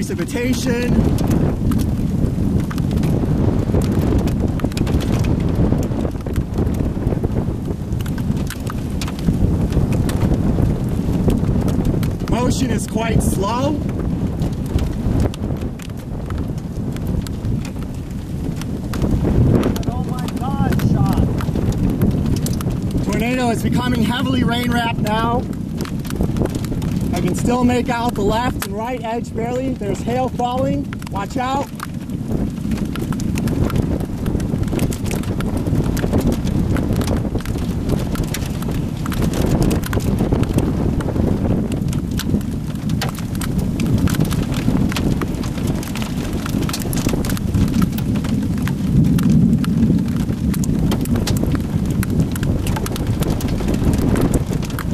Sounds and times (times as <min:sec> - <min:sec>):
Rain on surface: 0:00.0 - 0:54.9.